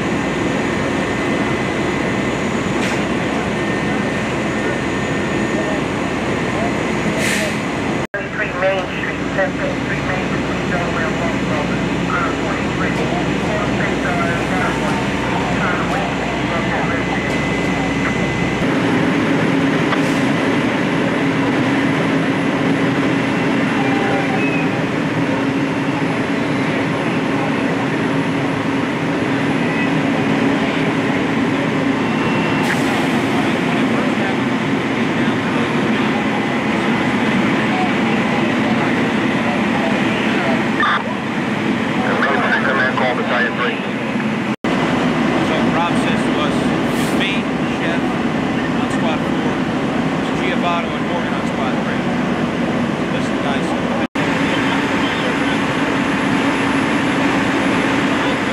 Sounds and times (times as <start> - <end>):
Fire: 0.0 - 58.5
Wind: 0.0 - 58.5.